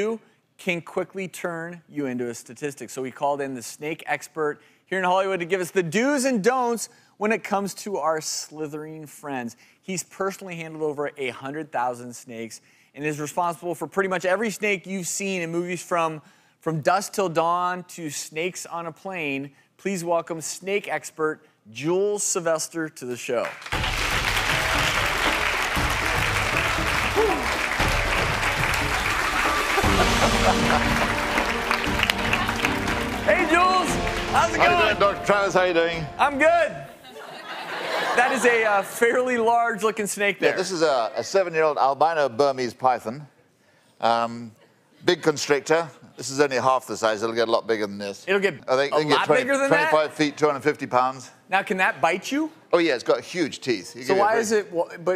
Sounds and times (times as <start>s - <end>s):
Inside, large room or hall: 22.0s - 41.7s
Music: 23.8s - 36.7s.